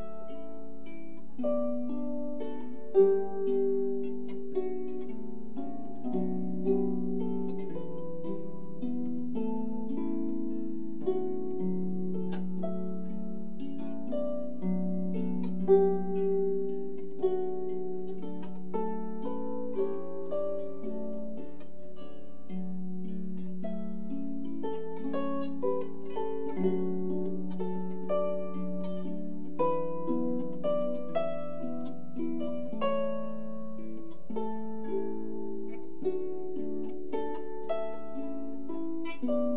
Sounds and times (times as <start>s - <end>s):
Harp: 0.0s - 39.5s.